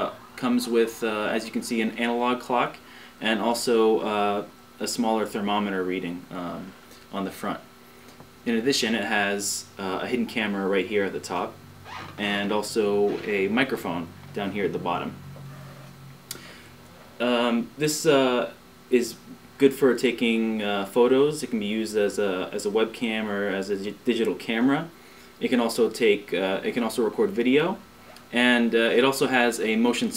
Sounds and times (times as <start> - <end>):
Speech: 0.0 - 7.7, 8.4 - 11.6, 12.2 - 15.2, 17.2 - 30.1.